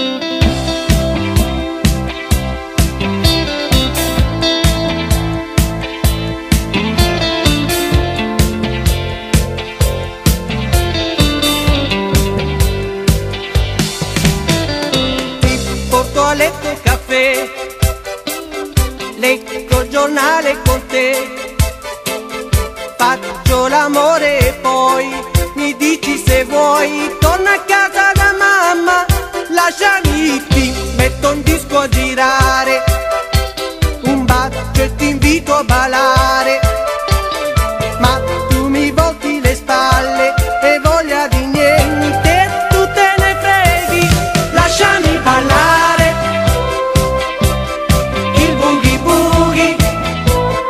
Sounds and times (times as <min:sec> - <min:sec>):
Guitar: 0:00.0 - 0:50.7.